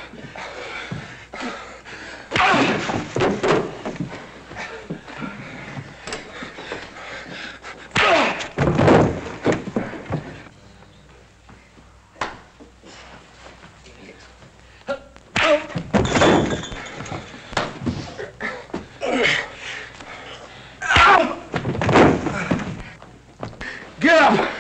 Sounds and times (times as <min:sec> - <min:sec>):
Speech: 0:13.8 - 0:15.7, 0:24.0 - 0:24.6.